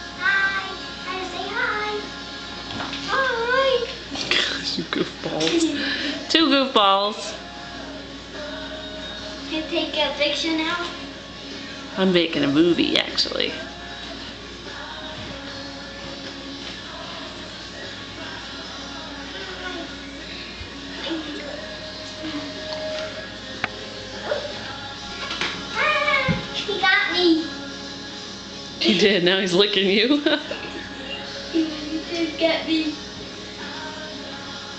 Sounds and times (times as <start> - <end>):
Music: 0.0 - 34.7.